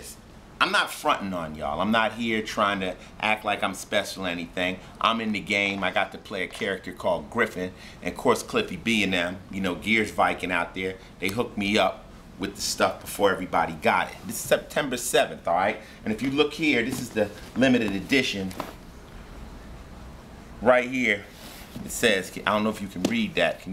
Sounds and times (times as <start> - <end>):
Speech: 0.0 - 18.6, 20.6 - 23.7.